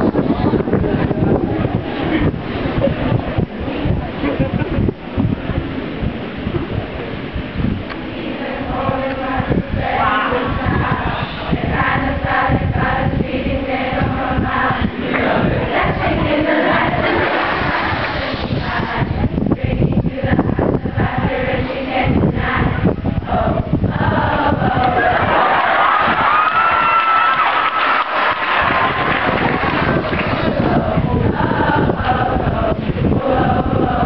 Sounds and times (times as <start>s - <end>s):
Choir: 7.8s - 34.0s.